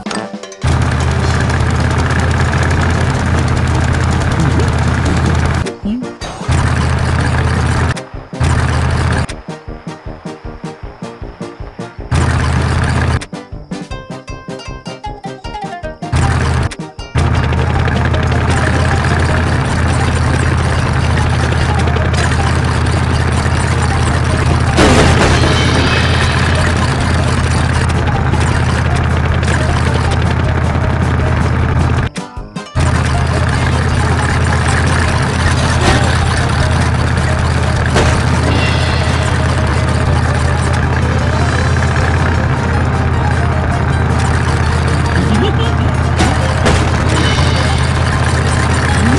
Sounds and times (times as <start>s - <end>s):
Music: 0.0s - 1.7s, 4.4s - 49.1s.